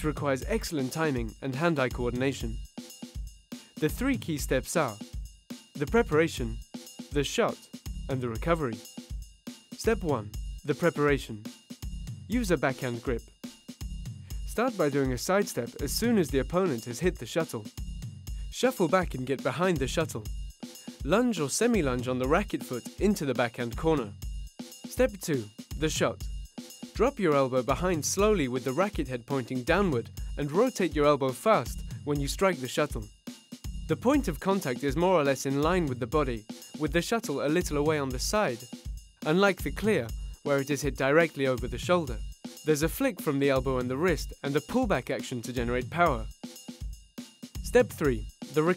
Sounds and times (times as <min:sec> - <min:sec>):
Speech: 0:00.0 - 0:02.6, 0:03.8 - 0:05.0, 0:05.8 - 0:06.6, 0:07.2 - 0:08.8, 0:09.8 - 0:11.5, 0:12.3 - 0:13.2, 0:14.5 - 0:17.7, 0:18.6 - 0:20.3, 0:21.1 - 0:24.1, 0:24.9 - 0:26.2, 0:27.0 - 0:33.1, 0:33.9 - 0:38.6, 0:39.3 - 0:46.3, 0:47.7 - 0:48.7
Music: 0:00.0 - 0:48.7.